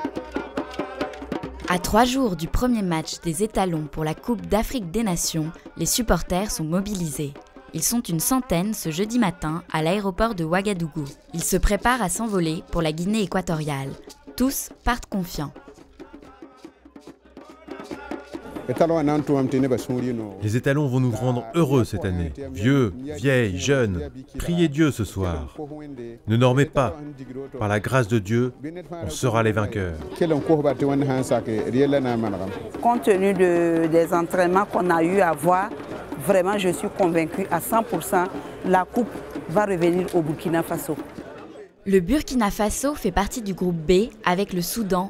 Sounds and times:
Music: 0:00.0 - 0:45.1
Speech: 0:01.7 - 0:15.5, 0:18.7 - 0:41.0, 0:41.9 - 0:45.1.

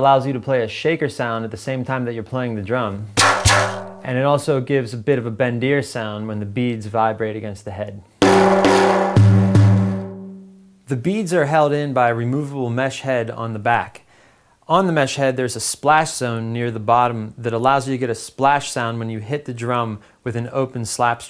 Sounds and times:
Speech: 0:00.0 - 0:03.1, 0:04.0 - 0:08.1, 0:10.9 - 0:14.0, 0:14.7 - 0:21.3.

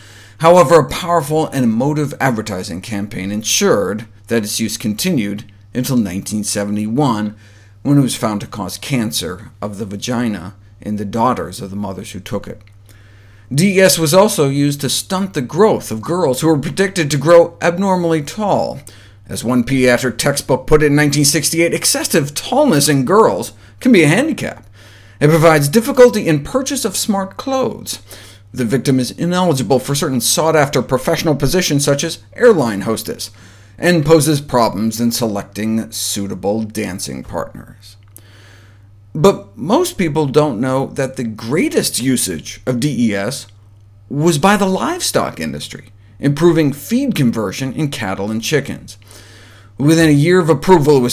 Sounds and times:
Speech: 0:00.4 - 0:12.6, 0:13.5 - 0:38.0, 0:39.2 - 0:49.0, 0:49.8 - 0:51.1.

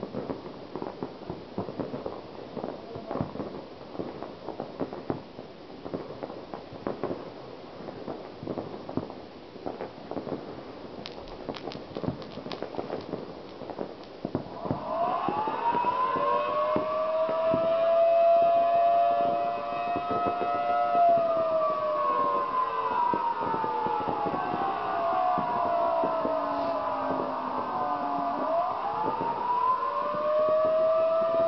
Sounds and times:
Civil defense siren: 0:14.5 - 0:31.4.

